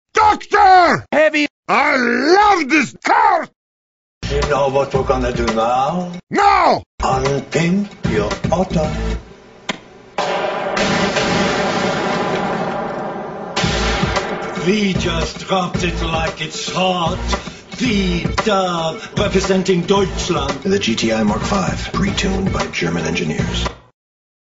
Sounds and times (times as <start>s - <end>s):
Speech: 0.1s - 3.5s, 4.2s - 9.0s, 14.6s - 17.2s, 17.8s - 23.8s
Music: 4.2s - 6.2s, 7.0s - 9.4s, 13.6s - 23.9s.